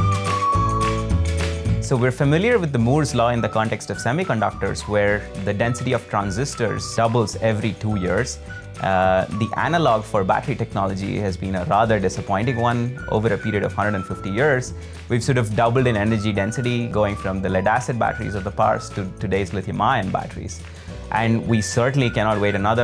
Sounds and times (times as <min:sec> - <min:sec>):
Music: 0:00.0 - 0:22.8
Speech: 0:01.8 - 0:22.8.